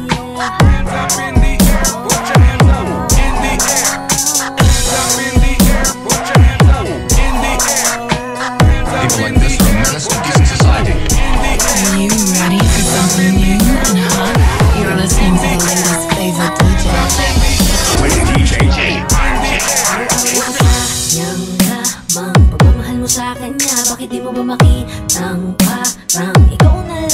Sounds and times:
Background music: 0.0 - 27.1
Speech: 9.0 - 10.9, 17.9 - 20.0.

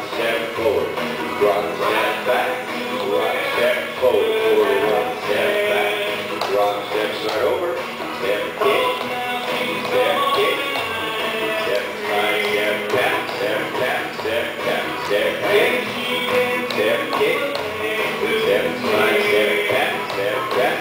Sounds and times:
Speech: 0.0 - 9.0, 18.3 - 20.8
Music: 0.0 - 20.8.

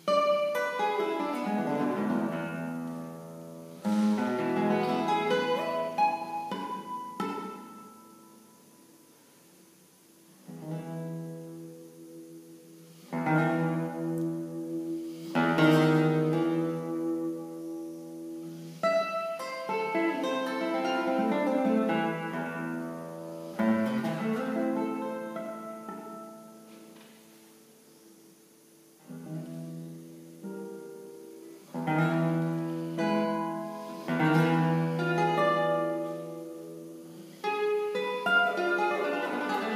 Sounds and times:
Strum: 0.0 - 8.8, 10.4 - 27.4, 29.0 - 39.7.

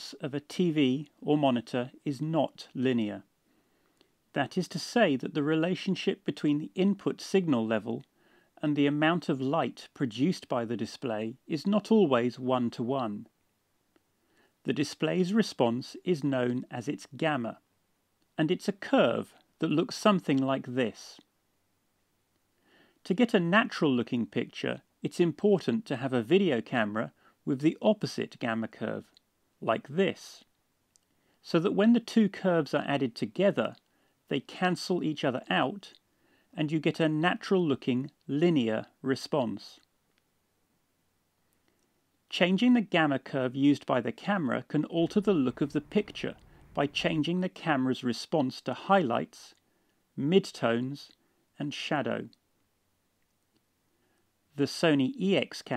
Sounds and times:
Speech: 0.0 - 3.3, 4.3 - 13.3, 14.6 - 17.6, 18.4 - 21.3, 23.0 - 30.5, 31.4 - 36.0, 36.6 - 39.8, 42.3 - 49.6, 50.2 - 52.4, 54.6 - 55.7.

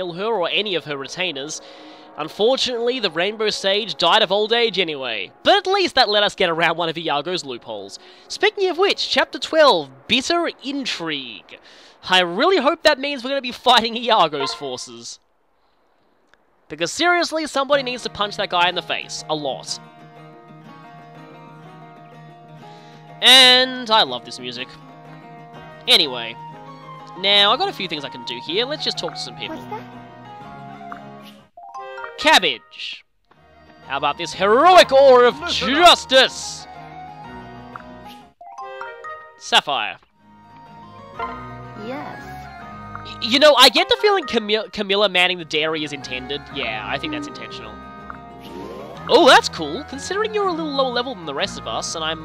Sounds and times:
Speech: 0.0 - 1.6, 2.2 - 15.2, 16.7 - 19.8, 23.2 - 24.8, 25.9 - 26.4, 27.2 - 29.8, 32.2 - 33.0, 33.9 - 36.7, 39.4 - 40.0, 43.1 - 47.8, 48.5 - 52.2
Music: 0.0 - 13.2, 17.6 - 52.2.

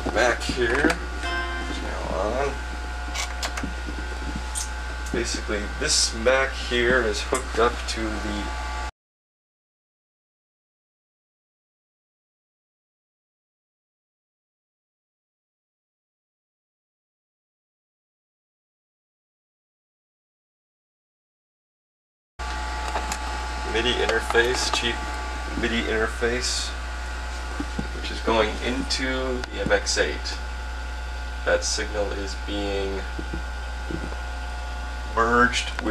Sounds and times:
Speech: 0.0 - 1.0, 1.7 - 2.6, 5.1 - 8.6, 23.6 - 26.8, 27.6 - 30.4, 31.5 - 34.2, 35.1 - 35.9.

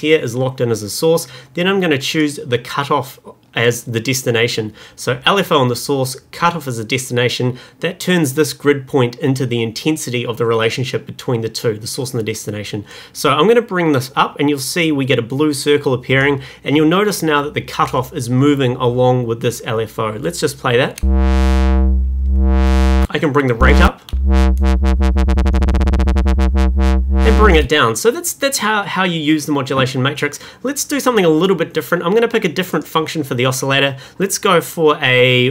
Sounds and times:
Speech: 0.0 - 21.0, 23.1 - 24.1, 27.2 - 35.5
Synthesizer: 21.0 - 27.7.

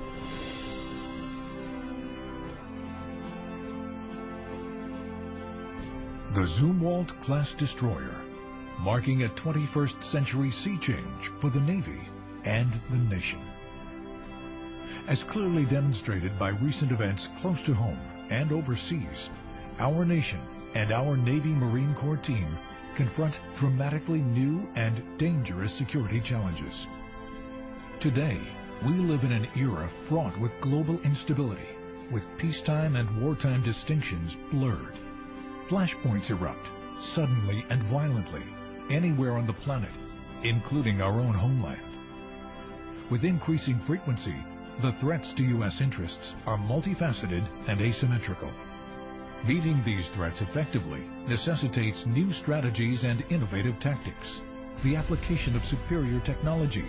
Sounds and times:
Music: 0.0 - 56.8
Speech: 6.3 - 13.5, 14.9 - 26.9, 28.0 - 35.0, 35.7 - 41.9, 43.1 - 48.6, 49.4 - 56.8.

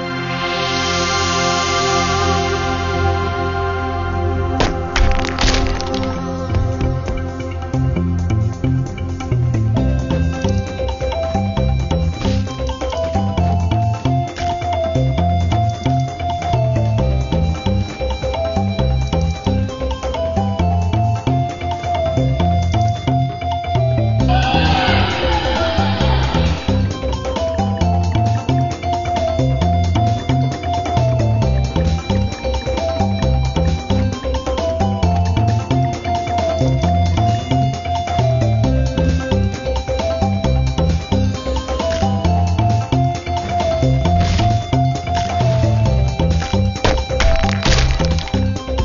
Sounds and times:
Music: 0.0 - 48.8.

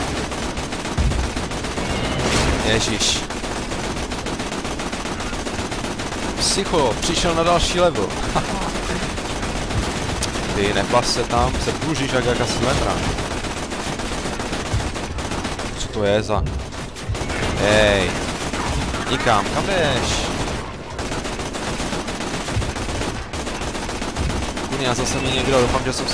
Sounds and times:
Fusillade: 0.0 - 26.1
Speech: 2.6 - 3.3, 6.4 - 8.7, 10.5 - 13.0, 15.8 - 16.5, 17.6 - 18.2, 19.0 - 20.4, 24.7 - 26.1.

